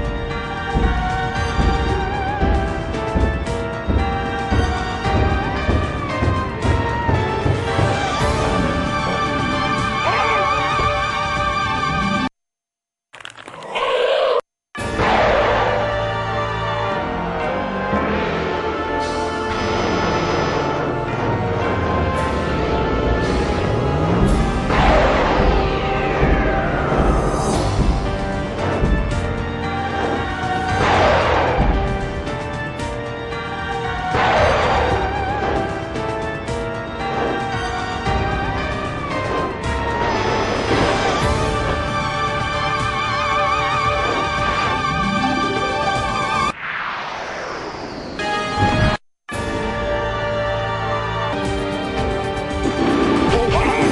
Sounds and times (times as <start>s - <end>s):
Music: 0.0s - 12.3s, 14.8s - 46.6s, 48.2s - 53.9s.